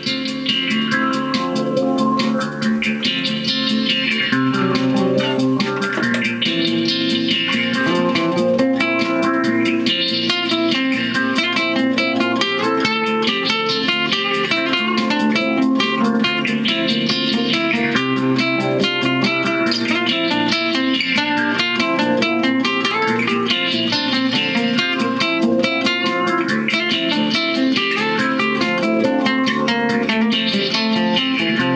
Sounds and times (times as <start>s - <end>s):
Acoustic guitar: 0.0s - 31.7s
Inside, small room: 0.0s - 31.7s.